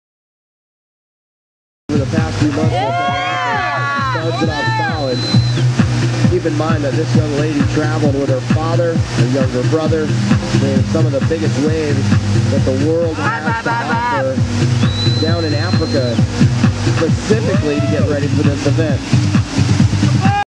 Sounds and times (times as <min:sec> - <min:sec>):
Speech: 0:01.9 - 0:05.3, 0:06.3 - 0:14.4, 0:15.2 - 0:16.2, 0:17.0 - 0:19.0
Boat, Water vehicle: 0:01.9 - 0:20.4
Music: 0:01.9 - 0:20.4.